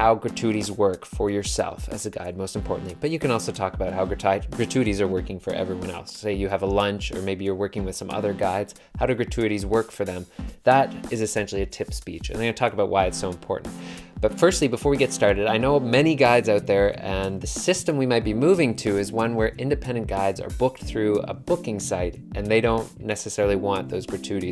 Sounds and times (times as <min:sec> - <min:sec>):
Male speech, man speaking: 0:00.0 - 0:24.5
Music: 0:00.0 - 0:24.5.